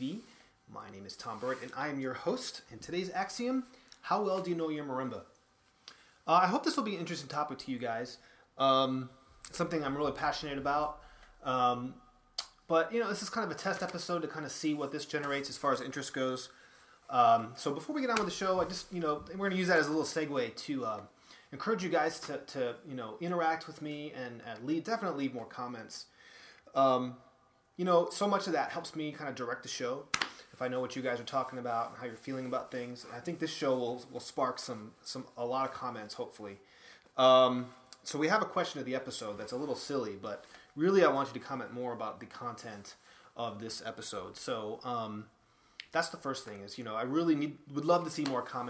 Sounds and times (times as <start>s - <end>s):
Speech: 0.0s - 5.3s, 6.3s - 12.0s, 12.7s - 26.1s, 26.7s - 27.2s, 27.8s - 36.6s, 37.2s - 45.3s, 45.9s - 48.6s.